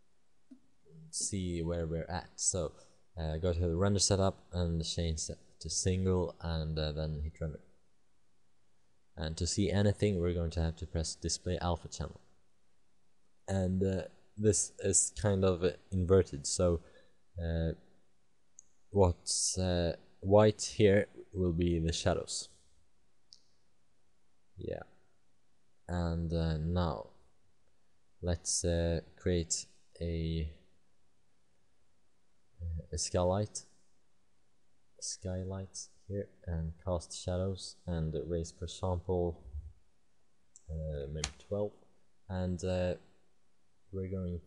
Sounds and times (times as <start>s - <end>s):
Speech: 1.0s - 7.7s, 9.2s - 12.2s, 13.5s - 17.8s, 19.0s - 22.5s, 24.6s - 24.9s, 25.9s - 27.2s, 28.2s - 30.6s, 32.6s - 33.6s, 35.0s - 39.7s, 40.6s - 43.0s, 44.0s - 44.4s.